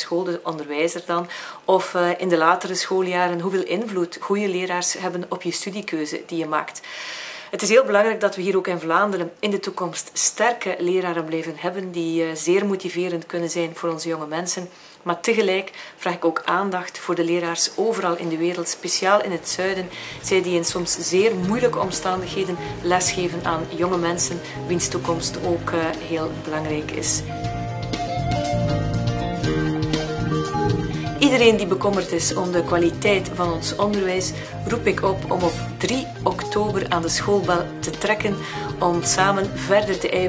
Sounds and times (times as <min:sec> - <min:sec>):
Speech: 0:00.0 - 0:06.8, 0:07.6 - 0:27.3, 0:31.2 - 0:40.2
Music: 0:19.4 - 0:40.2.